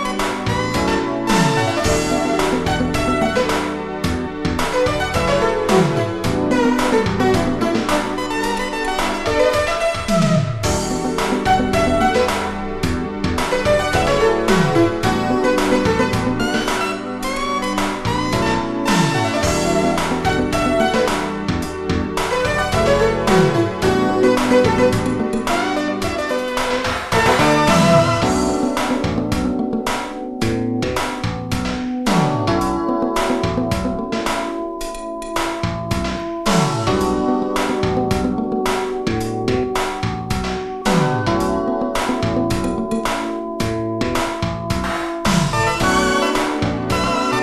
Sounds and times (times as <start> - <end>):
Synthesizer: 0.0 - 47.4.